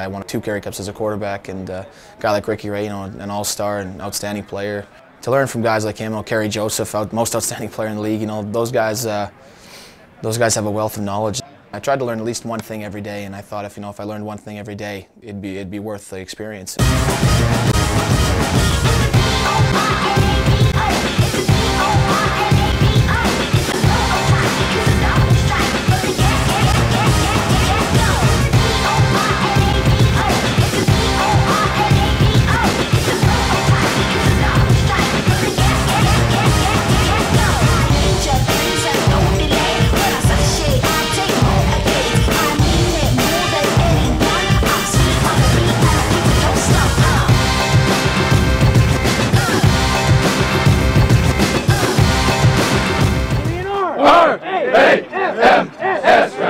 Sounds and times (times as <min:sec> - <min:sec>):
Speech: 0:00.0 - 0:09.4, 0:10.2 - 0:16.8
Music: 0:16.8 - 0:53.7.